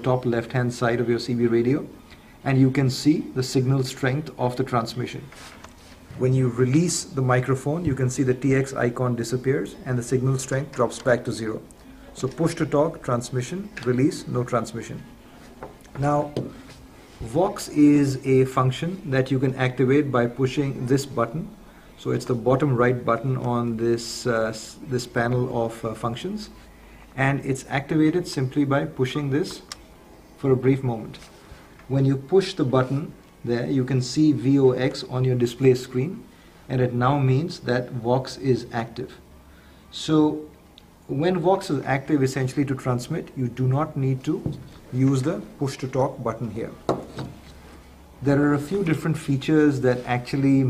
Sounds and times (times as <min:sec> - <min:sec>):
Speech: 0:00.0 - 0:05.4, 0:06.2 - 0:15.2, 0:15.9 - 0:16.6, 0:17.2 - 0:26.6, 0:27.2 - 0:29.8, 0:30.4 - 0:31.3, 0:31.9 - 0:39.3, 0:39.9 - 0:46.9, 0:48.2 - 0:50.7.